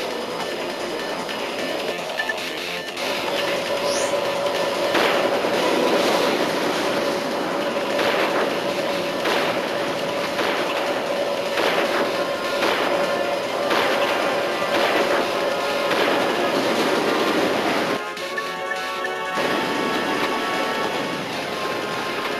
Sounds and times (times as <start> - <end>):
Music: 0.0 - 8.1, 18.0 - 22.3.